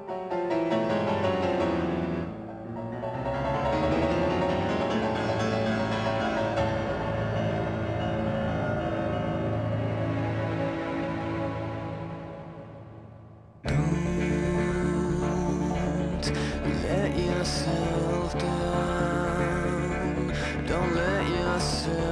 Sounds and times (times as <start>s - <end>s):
Music: 0.0s - 22.1s.